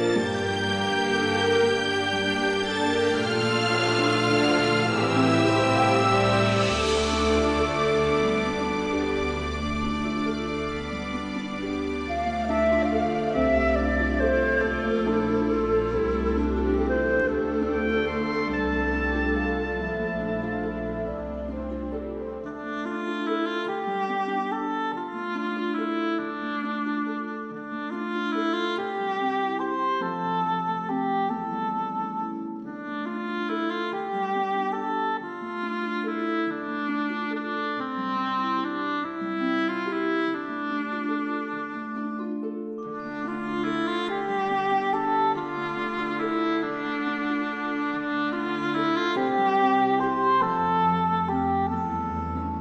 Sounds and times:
French horn: 0.0 - 42.2, 42.9 - 52.6.

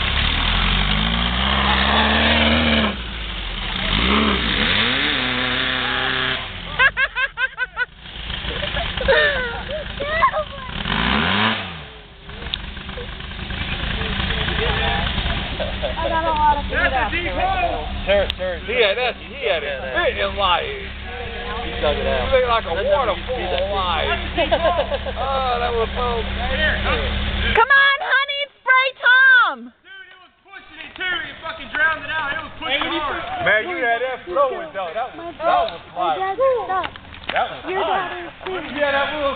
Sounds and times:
Race car, auto racing: 0.0 - 7.1, 7.8 - 27.7.

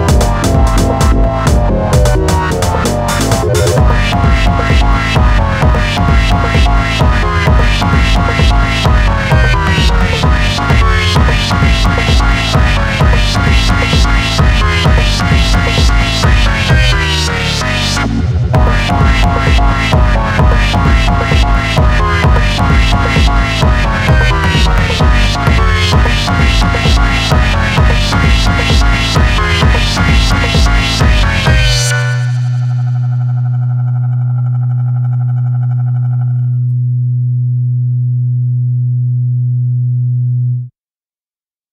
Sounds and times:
Music: 0.0 - 40.8.

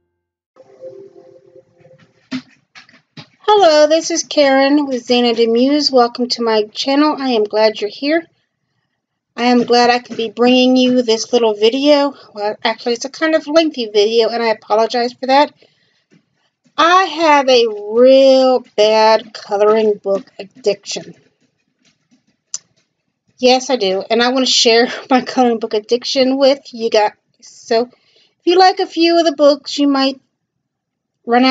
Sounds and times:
Speech: 3.4 - 8.3, 9.4 - 15.6, 16.8 - 21.2, 23.4 - 27.9, 28.5 - 30.2, 31.3 - 31.5.

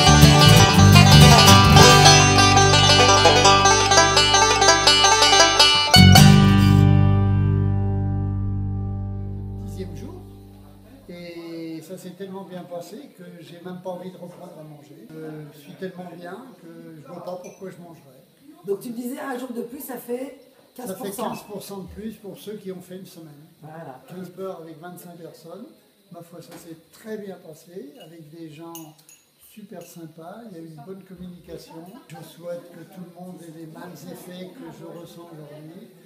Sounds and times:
Speech: 9.7 - 10.2, 10.8 - 36.0.

